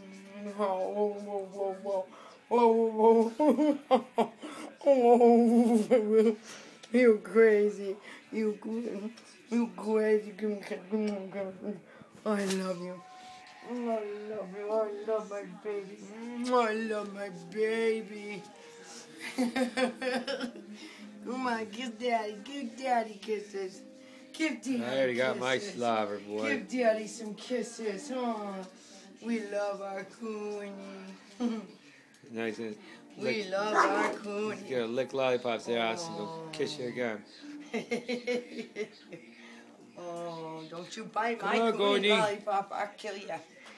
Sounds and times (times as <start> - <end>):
Inside, small room: 0.0 - 43.7.